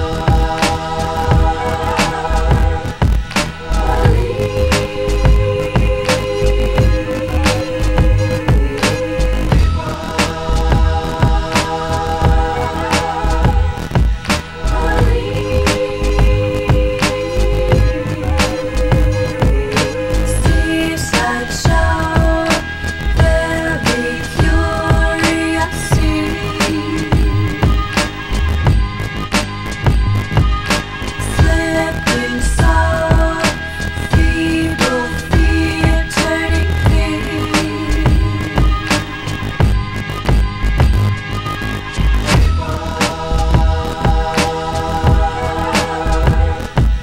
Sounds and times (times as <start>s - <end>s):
Music: 0.0s - 47.0s.